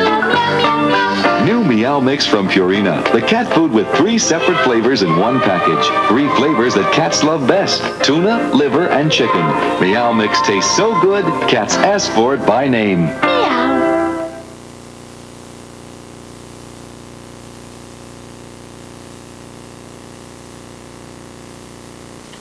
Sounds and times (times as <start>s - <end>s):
Music: 0.0s - 14.5s
Speech: 1.4s - 13.8s.